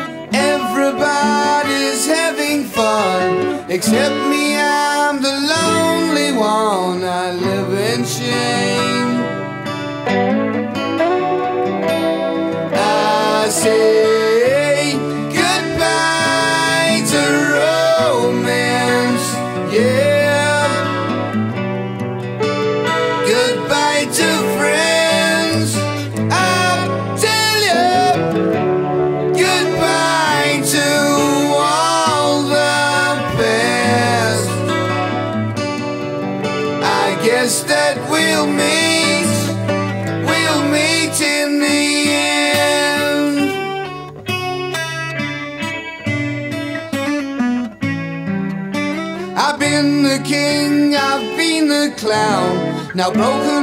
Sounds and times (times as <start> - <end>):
Guitar: 0.0 - 53.6.